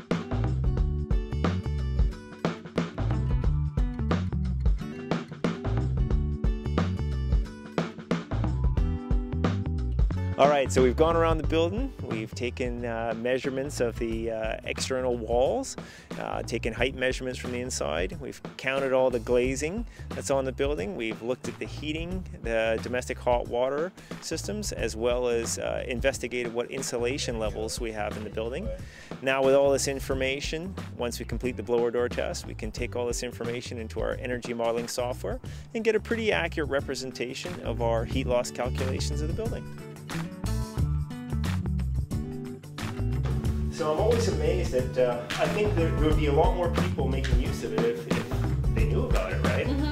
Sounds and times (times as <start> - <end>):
Music: 0.0 - 49.9
Speech: 10.4 - 39.6, 43.7 - 48.2, 48.8 - 49.9.